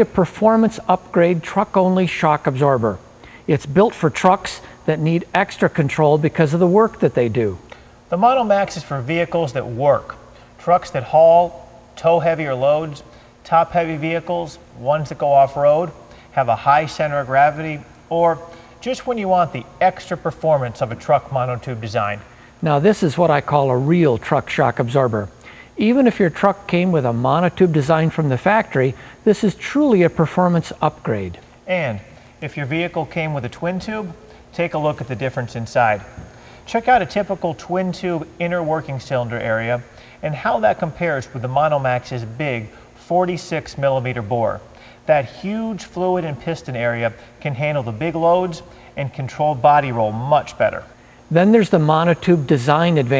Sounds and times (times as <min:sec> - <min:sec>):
Speech: 0:00.0 - 0:53.1.